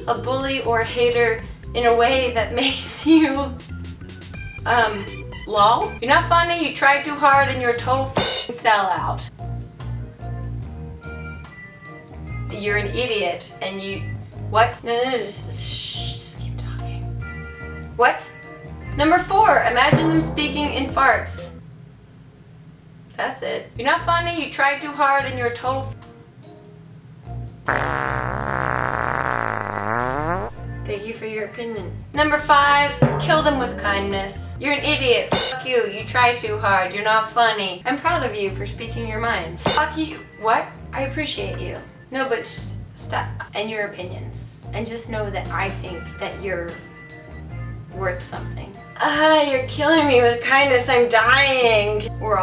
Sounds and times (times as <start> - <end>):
Speech: 0.0 - 3.6, 4.7 - 9.3, 12.5 - 17.0, 18.0 - 18.3, 19.0 - 21.6, 23.1 - 26.0, 30.8 - 46.8, 48.0 - 52.4
Music: 0.0 - 22.0, 23.7 - 52.4.